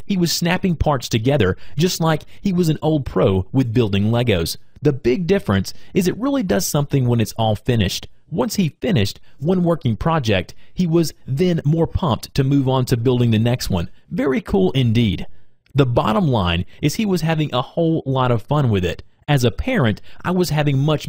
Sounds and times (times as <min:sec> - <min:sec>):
Speech: 0:00.0 - 0:21.0.